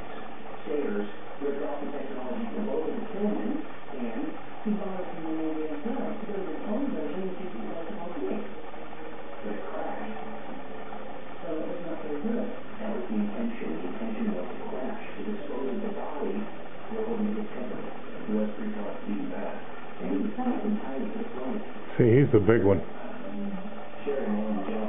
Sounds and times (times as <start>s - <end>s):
Speech: 0.6s - 8.6s, 11.4s - 24.8s.